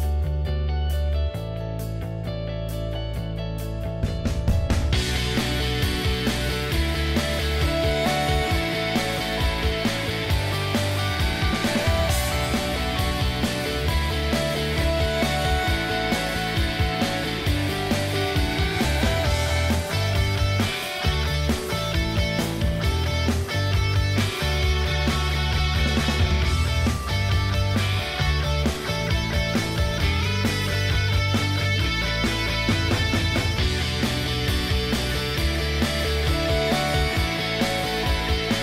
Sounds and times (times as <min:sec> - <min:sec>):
Music: 0:00.0 - 0:38.6.